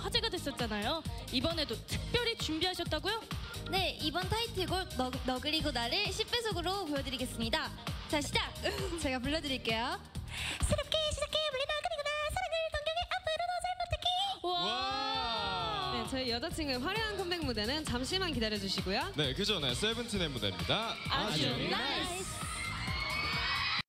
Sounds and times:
Music: 0.0s - 23.8s.

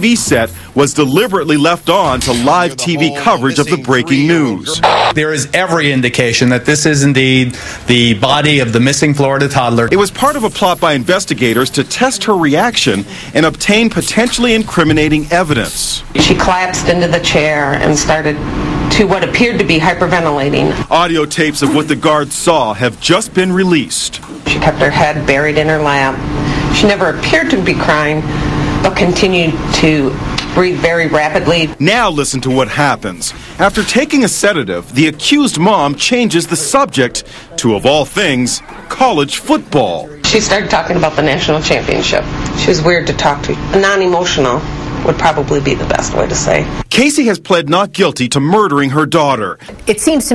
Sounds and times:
Speech: 0.0s - 18.2s.

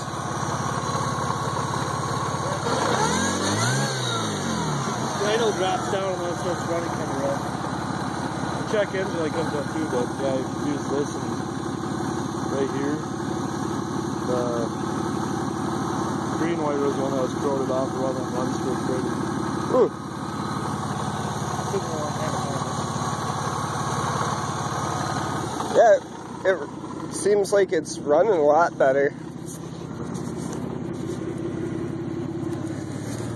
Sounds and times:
Car: 0.0s - 33.3s
Idling: 0.0s - 33.3s
Speech: 5.2s - 7.5s, 8.6s - 11.4s, 12.5s - 13.1s, 14.2s - 14.8s, 16.4s - 20.0s, 21.7s - 22.7s, 25.7s - 29.2s.

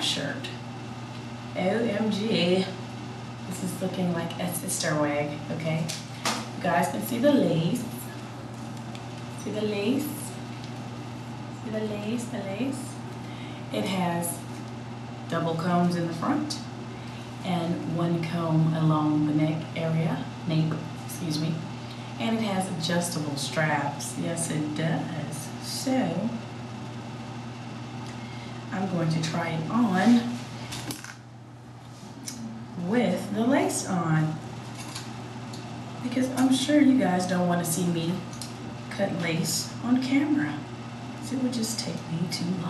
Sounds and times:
Speech: 0.0s - 0.6s, 1.6s - 2.8s, 3.5s - 6.0s, 6.6s - 8.2s, 9.4s - 10.4s, 11.6s - 13.0s, 13.7s - 14.5s, 15.3s - 16.7s, 17.4s - 26.4s, 28.7s - 30.4s, 32.8s - 34.4s, 36.0s - 38.3s, 38.9s - 42.7s
Inside, small room: 0.0s - 42.7s.

